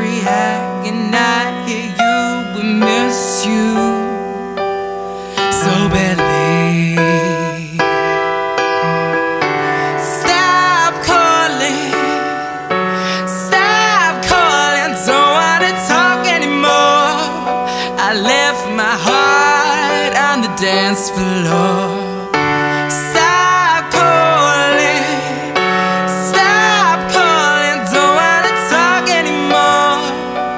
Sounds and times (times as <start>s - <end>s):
Music: 0.0s - 30.5s.